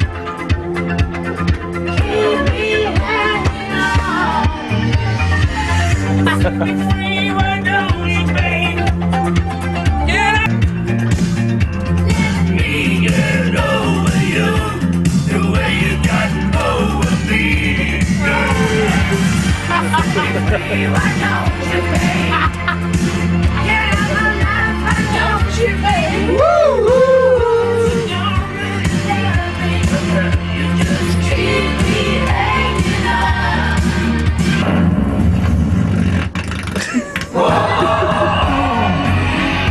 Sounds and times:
Choir: 1.9 - 6.0, 12.1 - 22.5, 23.9 - 34.2, 37.4 - 39.7
Male singing: 6.3 - 8.9, 12.1 - 19.2, 19.8 - 22.5, 26.4 - 31.5.

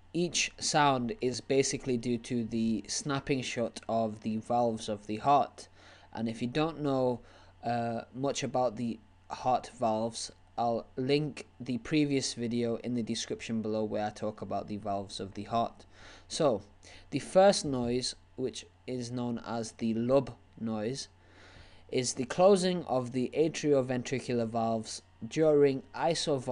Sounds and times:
Speech: 0.1 - 21.2, 21.9 - 26.5.

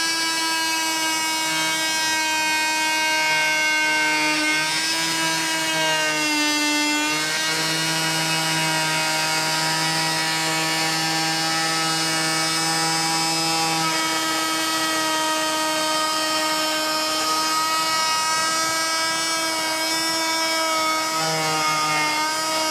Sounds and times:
Power tool: 0.0 - 22.7.

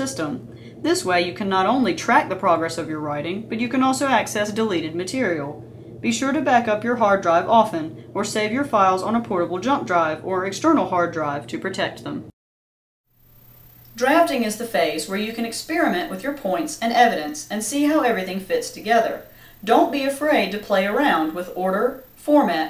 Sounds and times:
Speech: 0.0 - 12.3, 14.0 - 22.6.

